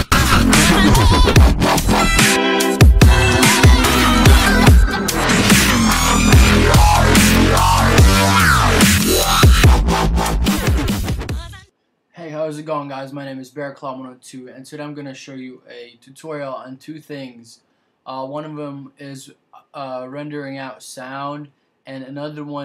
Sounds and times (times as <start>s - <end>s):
Music: 0.0s - 11.7s
Speech: 11.4s - 22.6s.